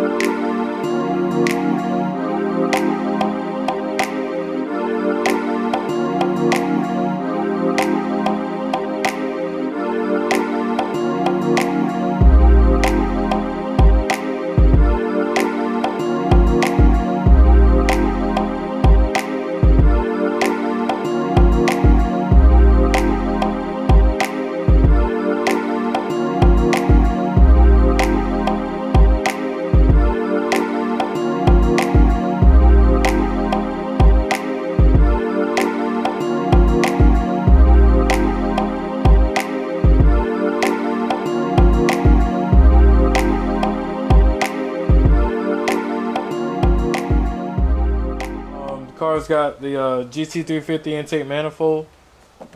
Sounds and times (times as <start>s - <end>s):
Music: 0.0s - 49.6s.